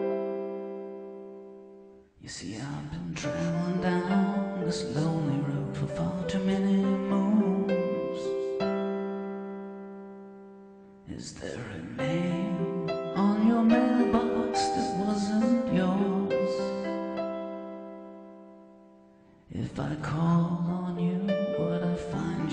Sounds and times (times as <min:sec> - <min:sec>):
Music: 0:00.0 - 0:22.5.